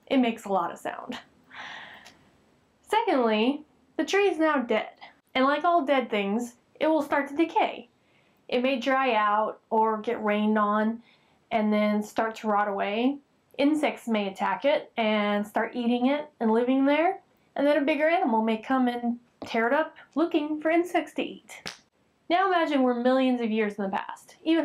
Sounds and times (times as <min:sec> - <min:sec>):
Speech: 0:00.0 - 0:01.2, 0:02.9 - 0:07.9, 0:08.5 - 0:21.7, 0:22.3 - 0:24.6.